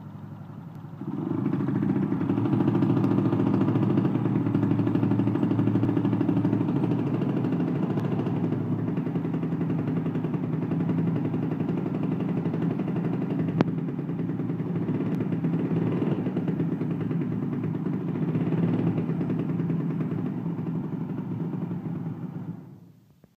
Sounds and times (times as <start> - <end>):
Medium engine (mid frequency): 0.0 - 23.3.